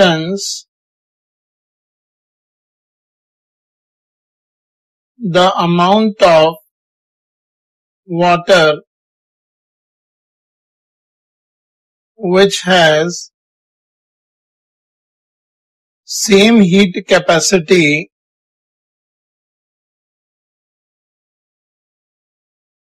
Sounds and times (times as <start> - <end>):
Speech: 0.0 - 0.6, 5.2 - 6.6, 8.1 - 8.9, 12.2 - 13.3, 16.1 - 18.1.